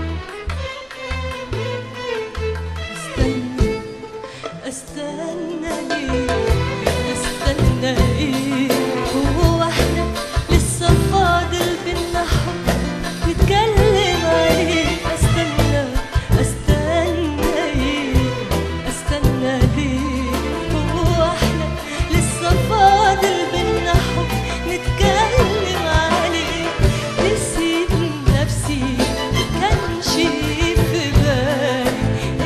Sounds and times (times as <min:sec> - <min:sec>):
Middle Eastern music: 0:00.0 - 0:32.4.